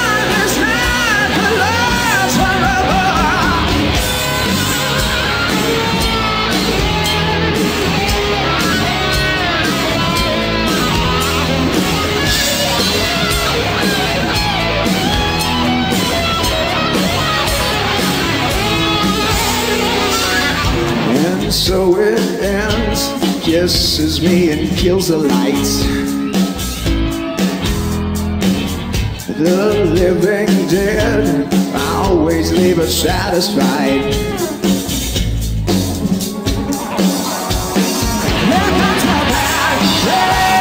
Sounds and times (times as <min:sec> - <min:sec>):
Heavy metal: 0:00.0 - 0:40.6.